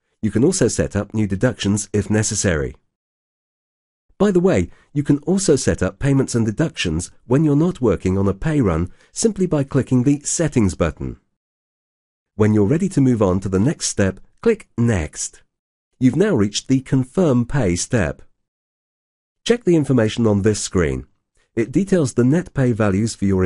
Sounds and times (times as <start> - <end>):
Speech: 0.2 - 2.8, 4.2 - 11.3, 12.4 - 18.3, 19.5 - 23.4.